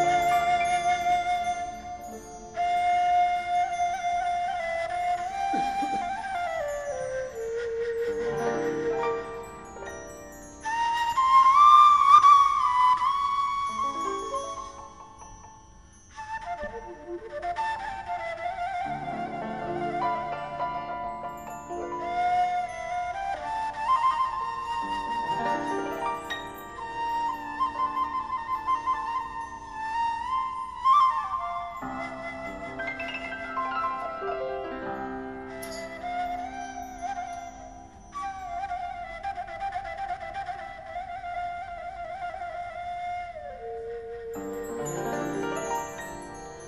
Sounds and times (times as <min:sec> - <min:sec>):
Orchestra: 0:00.0 - 0:46.6.